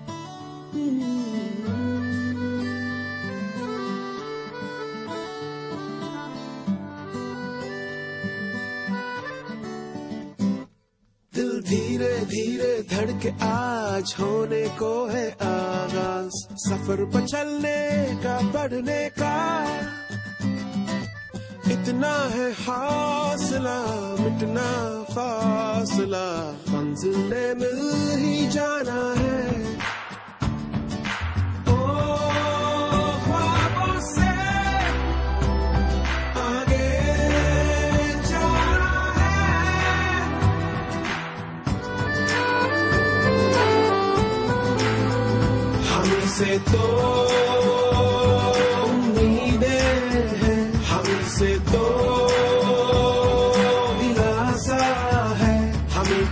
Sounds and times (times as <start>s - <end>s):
Music: 0.0s - 56.3s.